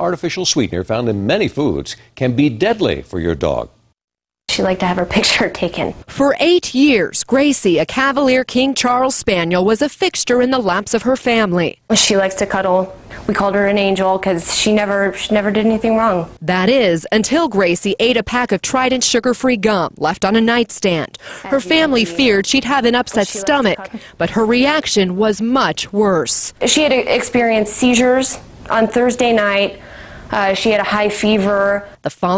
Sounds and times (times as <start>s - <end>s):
Speech: 0.0s - 3.8s, 4.5s - 29.7s.